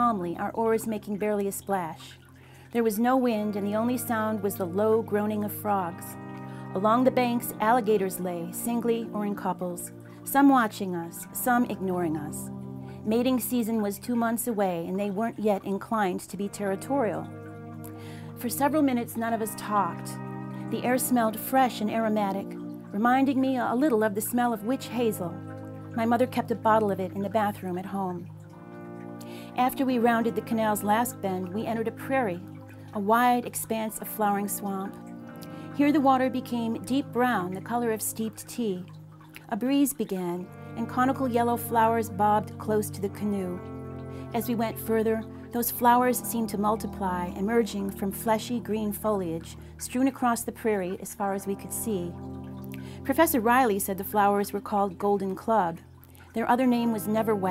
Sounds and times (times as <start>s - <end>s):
Speech: 0.0s - 2.2s, 2.8s - 6.2s, 6.8s - 12.5s, 13.1s - 17.2s, 18.4s - 25.4s, 26.0s - 28.2s, 29.6s - 32.4s, 33.0s - 35.0s, 35.8s - 38.9s, 39.5s - 43.6s, 44.4s - 52.2s, 53.0s - 55.8s, 56.4s - 57.5s
Music: 0.0s - 57.5s.